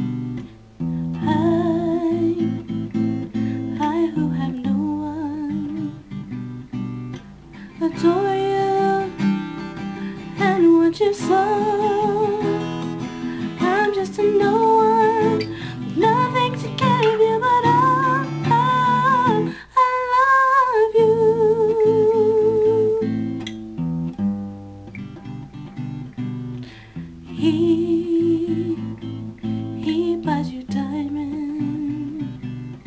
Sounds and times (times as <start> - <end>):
Strum: 0.0 - 20.3
Acoustic guitar: 0.0 - 32.8.